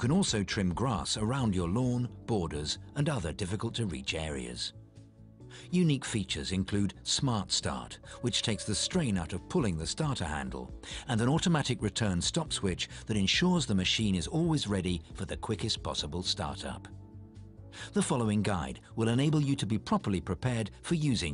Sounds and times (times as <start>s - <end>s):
Speech: 0.0s - 4.8s, 5.7s - 16.9s, 17.8s - 21.3s
Music: 0.0s - 21.3s.